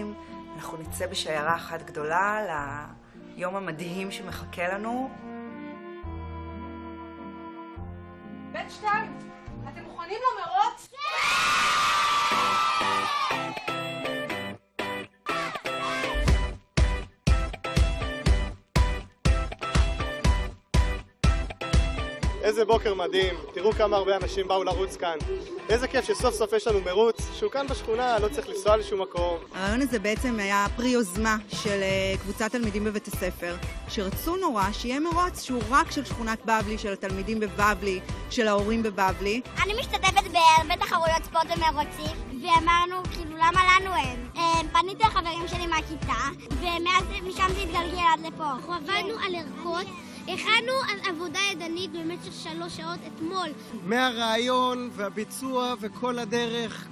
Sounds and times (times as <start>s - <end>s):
Music: 0.0s - 56.9s.